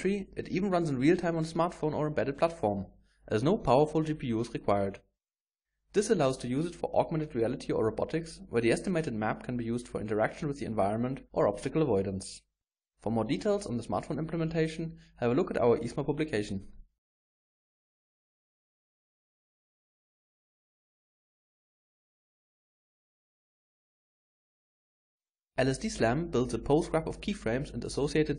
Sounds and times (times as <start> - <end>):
Speech: 0.0 - 5.1, 6.0 - 16.8, 25.6 - 28.3.